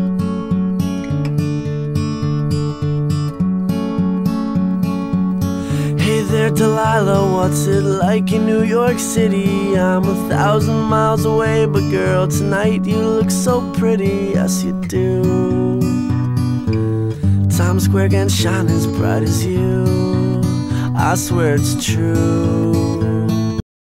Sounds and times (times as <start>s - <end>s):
Music: 0.0s - 23.6s.